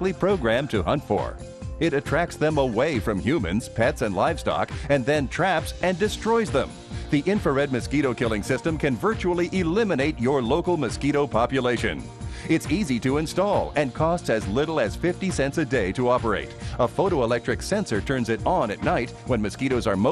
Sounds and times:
Music: 0:00.0 - 0:20.1
Speech: 0:00.0 - 0:20.1.

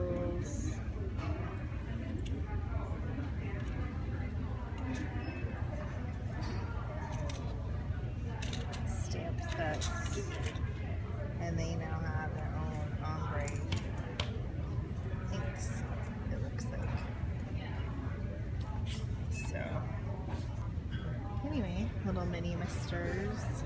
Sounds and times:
Speech: 0:00.0 - 0:14.1, 0:15.1 - 0:20.5, 0:21.3 - 0:23.6.

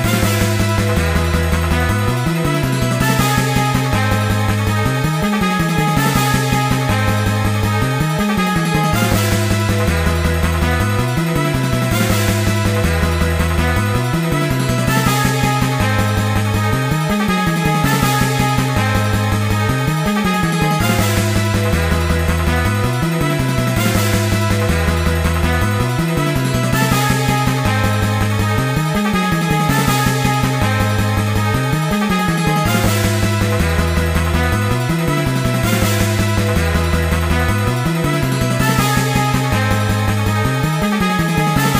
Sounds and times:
Soundtrack music: 0:00.0 - 0:41.7
Video game music: 0:00.0 - 0:41.7.

